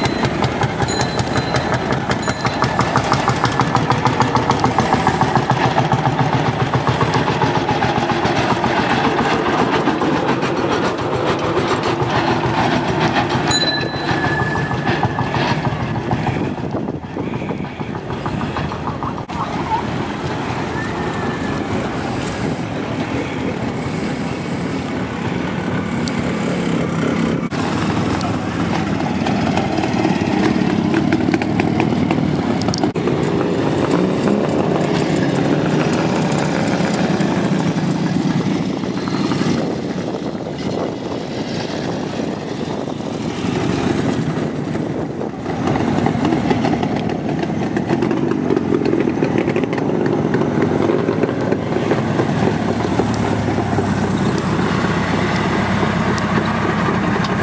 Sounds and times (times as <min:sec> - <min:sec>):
Motorcycle: 0:00.0 - 0:57.4.